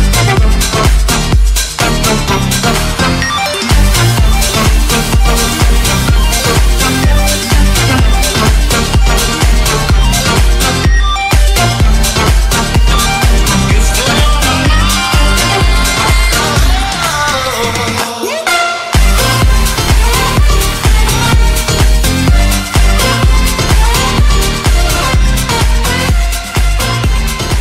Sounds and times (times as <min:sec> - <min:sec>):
Dance music: 0:00.0 - 0:27.6.